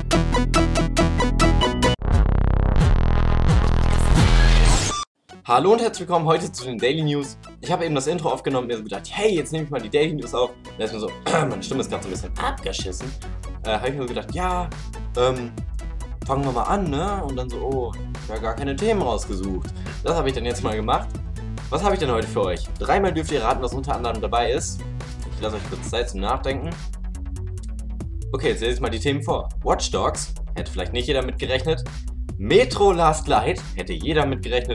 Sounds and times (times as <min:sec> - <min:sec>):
Music: 0:00.0 - 0:34.7
Speech: 0:05.5 - 0:15.6, 0:16.3 - 0:21.1, 0:21.7 - 0:24.8, 0:25.4 - 0:26.8, 0:28.3 - 0:34.7.